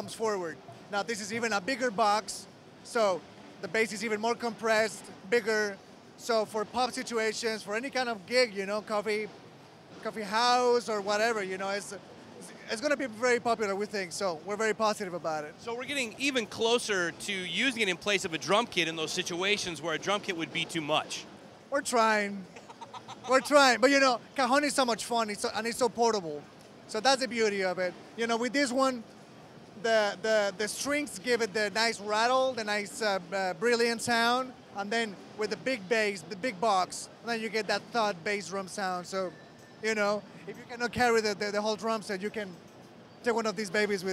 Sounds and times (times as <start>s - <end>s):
Speech: 0.0s - 9.3s, 10.0s - 22.5s, 23.3s - 29.0s, 29.8s - 42.6s, 43.2s - 44.1s.